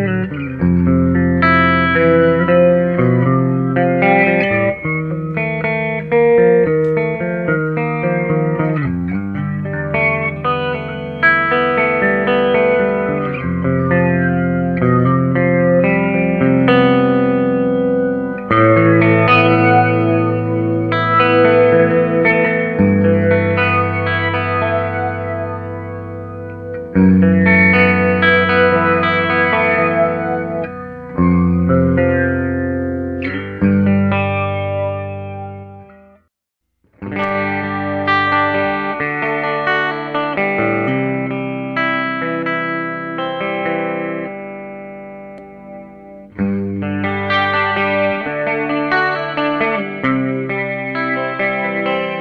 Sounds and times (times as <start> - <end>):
Distortion: 0.0 - 52.2
Music: 0.0 - 52.2.